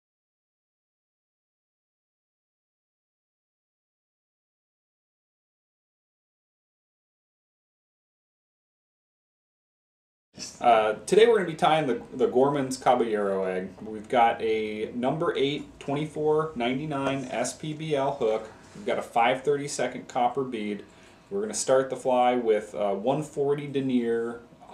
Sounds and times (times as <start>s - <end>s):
Speech: 10.4s - 24.7s.